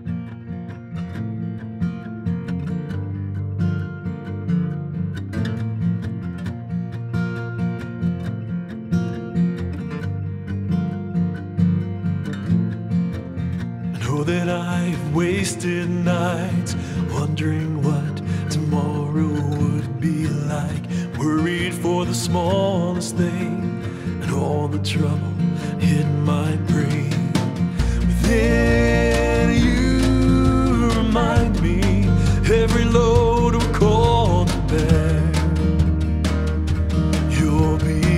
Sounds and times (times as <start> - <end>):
Jazz: 27.5 - 38.1.